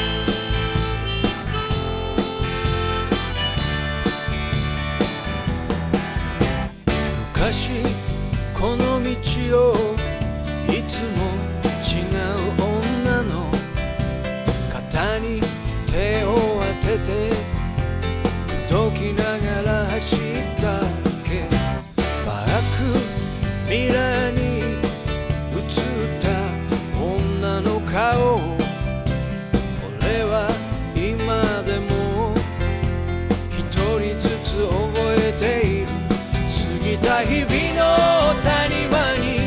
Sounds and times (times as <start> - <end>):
Music: 0.0 - 39.4.